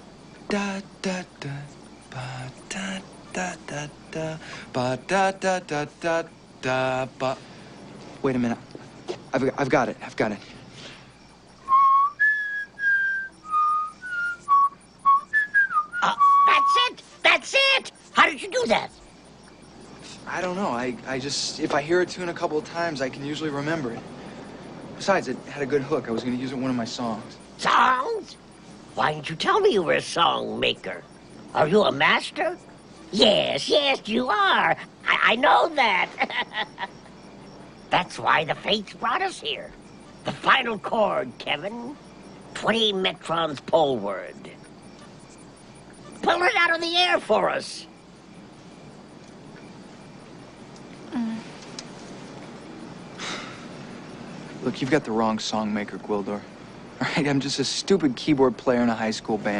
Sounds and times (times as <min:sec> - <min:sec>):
Whistling: 0:11.6 - 0:17.2.